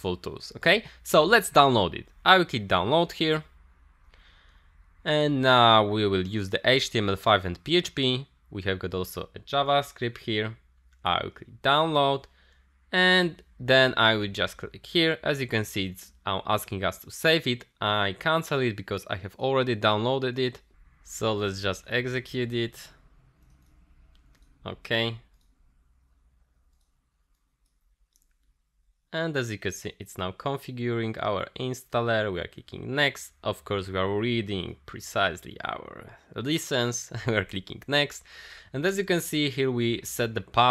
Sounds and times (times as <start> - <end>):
Speech: 0.0 - 3.5, 5.0 - 12.3, 13.0 - 23.0, 24.6 - 25.3, 29.1 - 40.7
Inside, small room: 0.0 - 40.7.